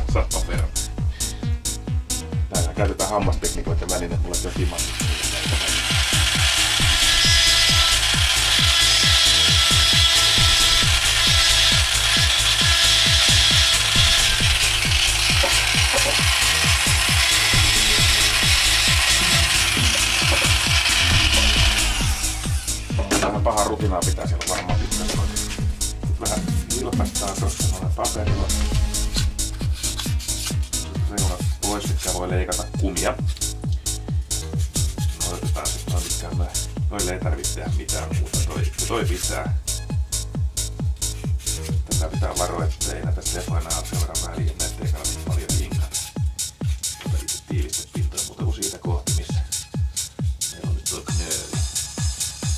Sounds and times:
Speech: 0.0 - 0.7, 2.5 - 4.9, 23.0 - 25.4, 26.2 - 28.6, 31.1 - 33.2, 35.2 - 39.5, 41.9 - 46.0, 47.0 - 49.5, 50.5 - 51.6
Music: 0.0 - 52.5.

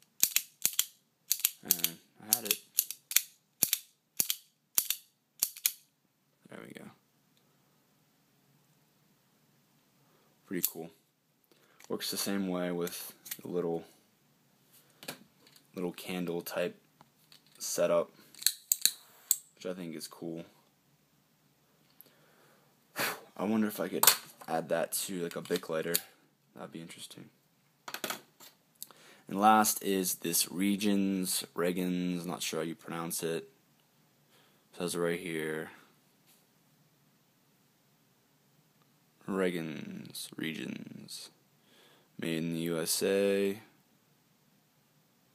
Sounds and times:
Inside, small room: 0.0 - 45.3
Speech: 1.6 - 2.6, 6.4 - 7.0, 10.5 - 11.0, 11.9 - 14.0, 15.8 - 16.8, 17.6 - 18.1, 19.6 - 20.6, 23.4 - 27.4, 29.3 - 33.5, 34.7 - 35.9, 39.2 - 41.4, 42.2 - 43.8.

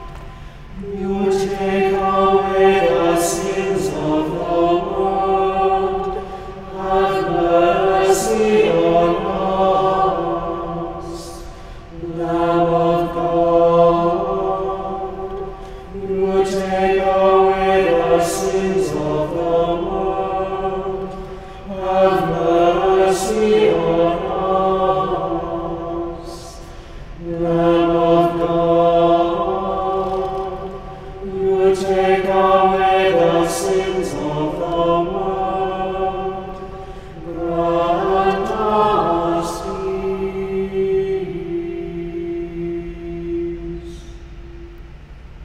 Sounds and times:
Mantra: 0.0 - 44.8.

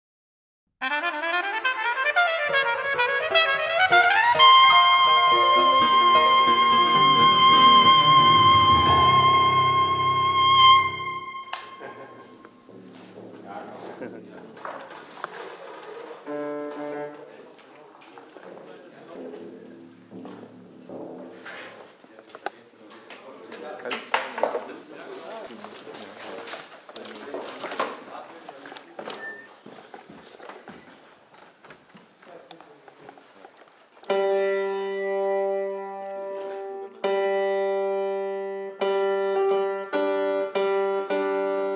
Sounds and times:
Trumpet: 0.8 - 12.7, 16.2 - 17.3, 34.0 - 41.7.

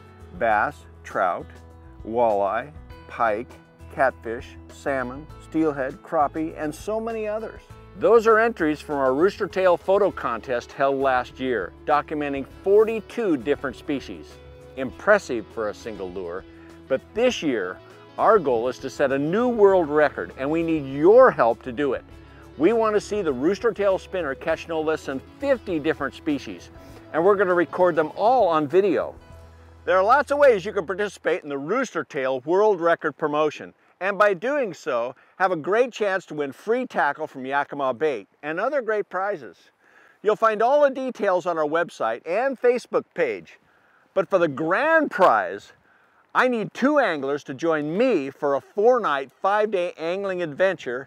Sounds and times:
Music: 0.0 - 33.2, 44.7 - 51.0
Speech: 0.4 - 22.0, 22.6 - 29.1, 29.9 - 43.6, 44.2 - 45.8, 46.4 - 51.0.

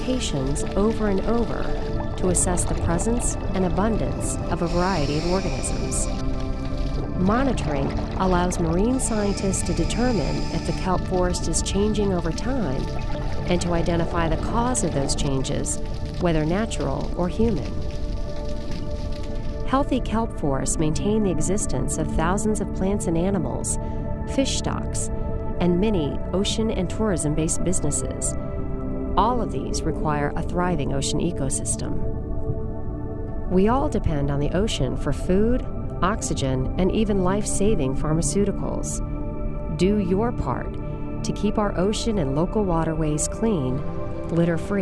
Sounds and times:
Speech: 0.0 - 6.1, 7.2 - 12.9, 13.5 - 17.8, 19.7 - 28.4, 29.2 - 32.0, 33.5 - 39.0, 39.7 - 44.8
Music: 0.0 - 44.8.

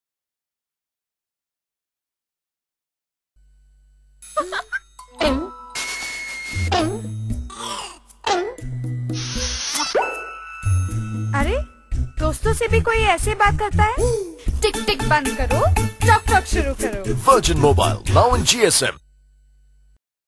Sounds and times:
Music: 4.2 - 18.8
Speech: 14.9 - 19.0.

